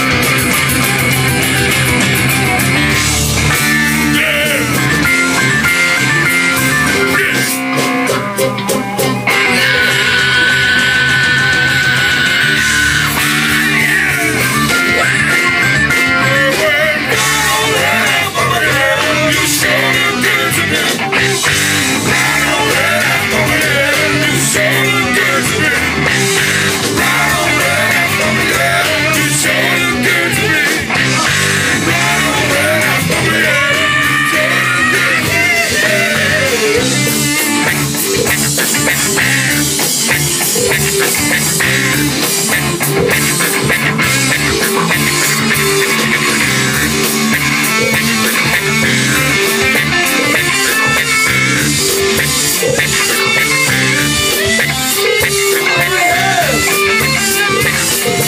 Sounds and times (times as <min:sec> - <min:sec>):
Music: 0:00.0 - 0:58.2
Singing: 0:13.7 - 0:21.1, 0:22.0 - 0:26.0, 0:26.9 - 0:30.9, 0:31.8 - 0:37.0, 0:55.1 - 0:58.2.